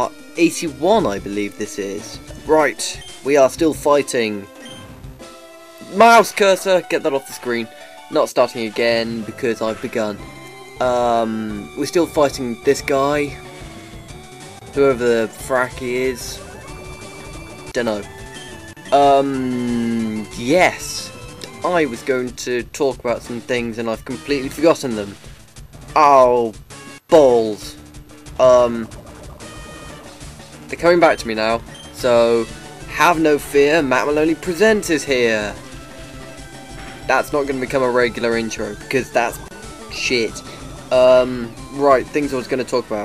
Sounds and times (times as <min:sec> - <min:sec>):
Speech: 0:00.0 - 0:04.4, 0:05.8 - 0:10.2, 0:10.8 - 0:13.4, 0:14.8 - 0:16.4, 0:17.8 - 0:18.1, 0:18.9 - 0:25.2, 0:26.0 - 0:26.5, 0:27.1 - 0:27.8, 0:28.4 - 0:28.9, 0:30.7 - 0:35.6, 0:37.1 - 0:43.0
Music: 0:00.0 - 0:43.0.